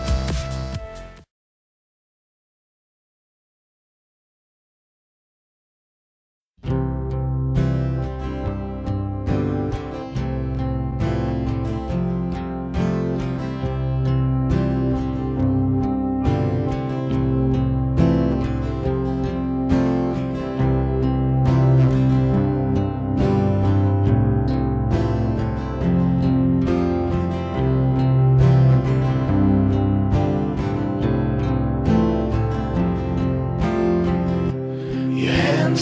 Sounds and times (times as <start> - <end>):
Music: 0.0 - 1.3, 6.6 - 35.8.